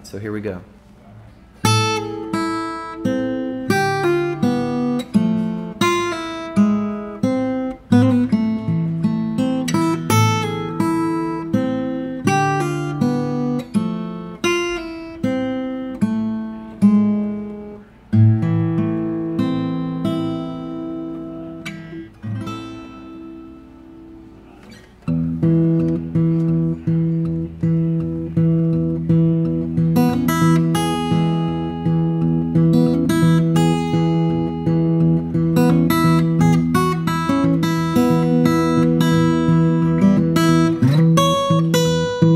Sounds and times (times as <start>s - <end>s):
Acoustic guitar: 0.0s - 42.3s.